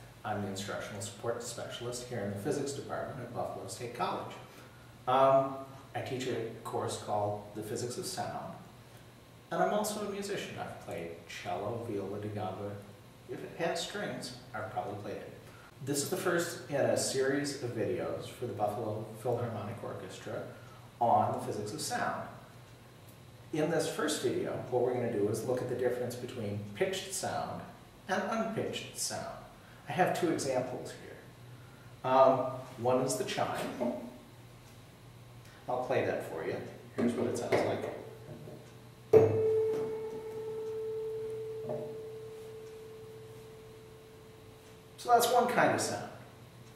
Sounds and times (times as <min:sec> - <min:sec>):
Speech: 0:00.2 - 0:04.5, 0:05.1 - 0:08.7, 0:09.5 - 0:22.5, 0:23.5 - 0:31.3, 0:32.0 - 0:34.2, 0:35.7 - 0:38.1, 0:45.0 - 0:46.3.